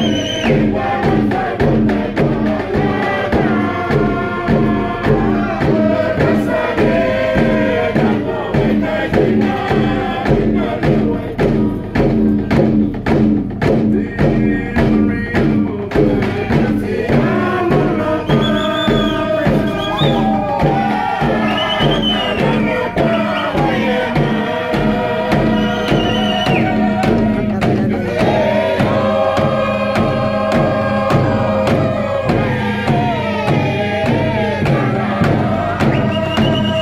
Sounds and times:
Music: 0.0s - 36.8s.

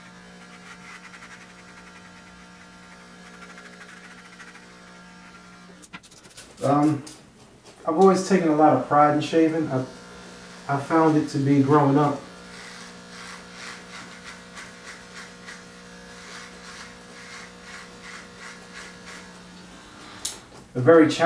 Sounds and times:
Electric shaver, electric razor: 0.0s - 5.9s, 7.9s - 21.2s
Speech: 6.6s - 7.0s, 7.8s - 9.9s, 10.7s - 12.2s, 20.8s - 21.2s.

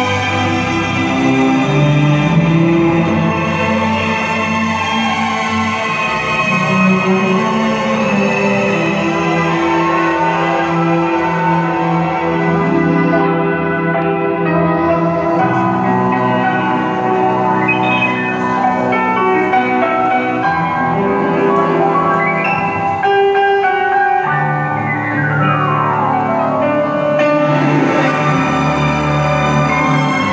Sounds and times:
Glockenspiel: 15.2s - 20.1s
Marimba, xylophone: 17.6s - 20.2s.

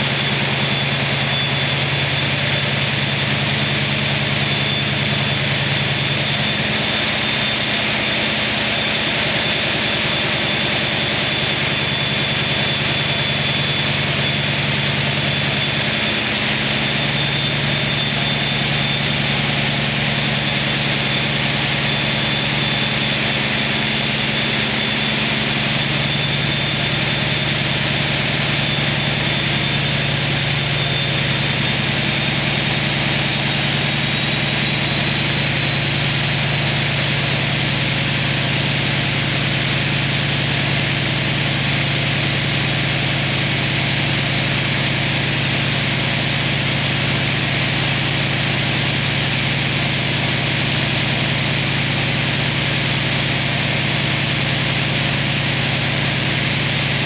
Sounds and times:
Heavy engine (low frequency): 0.0s - 57.0s
Idling: 0.0s - 57.0s.

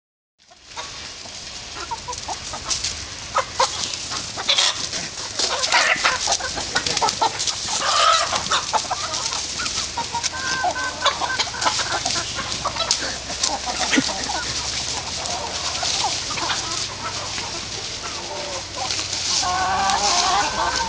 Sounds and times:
Cluck: 0.4s - 20.8s.

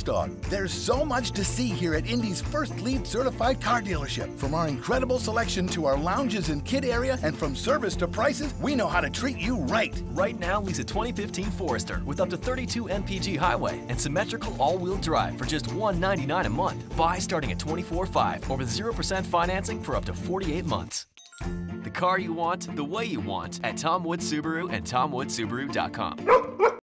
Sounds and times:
Speech: 0.0s - 21.0s, 21.9s - 26.2s
Music: 0.0s - 26.8s.

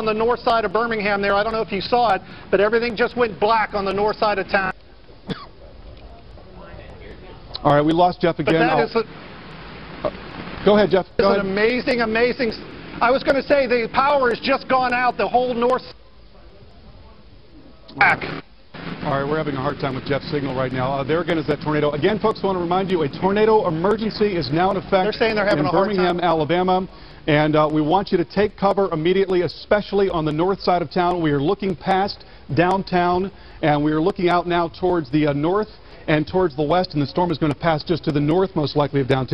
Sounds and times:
Speech: 0.0s - 4.8s, 6.0s - 9.1s, 10.7s - 18.3s, 19.0s - 39.3s.

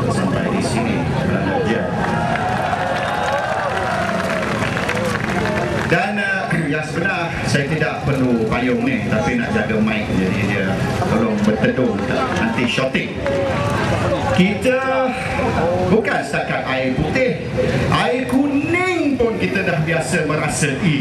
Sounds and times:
Male speech, man speaking: 0.0s - 1.9s, 5.9s - 13.2s, 14.3s - 21.0s.

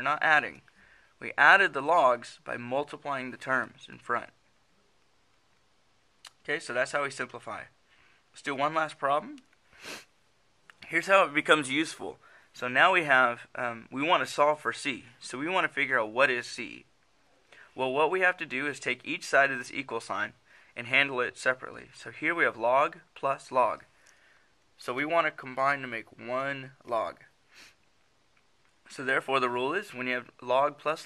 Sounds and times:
Narration, monologue: 0.0s - 31.0s.

